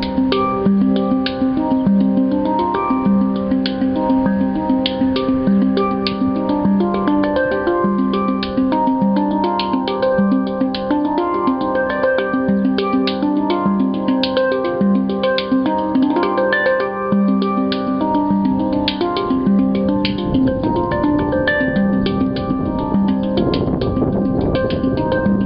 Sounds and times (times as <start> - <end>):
Harmonic: 0.0 - 25.4
Music: 0.0 - 25.4.